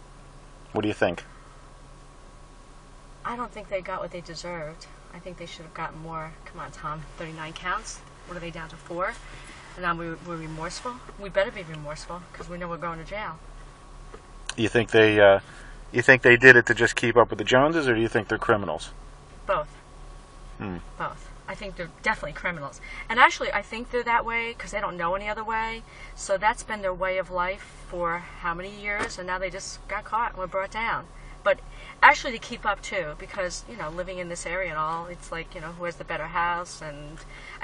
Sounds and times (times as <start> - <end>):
Speech: 0.8 - 1.2, 3.3 - 9.2, 9.8 - 13.4, 14.5 - 15.4, 16.0 - 18.9, 20.6 - 37.6.